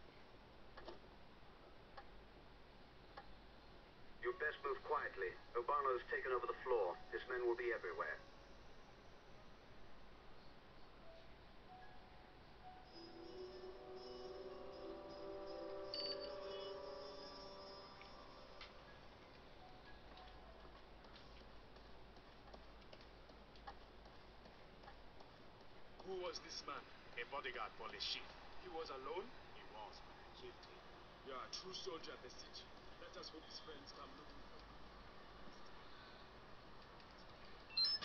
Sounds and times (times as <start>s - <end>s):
Speech: 4.2s - 8.2s, 26.0s - 34.7s
Music: 11.0s - 21.5s.